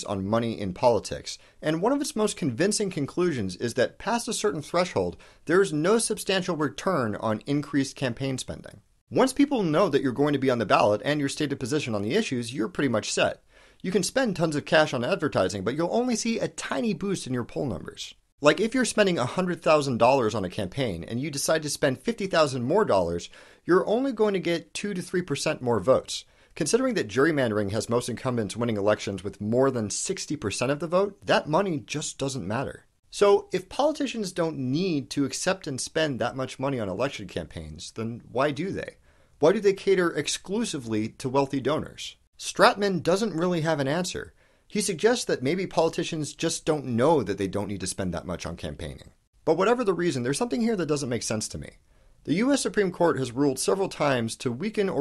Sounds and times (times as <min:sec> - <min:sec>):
Speech: 0:00.0 - 0:55.0.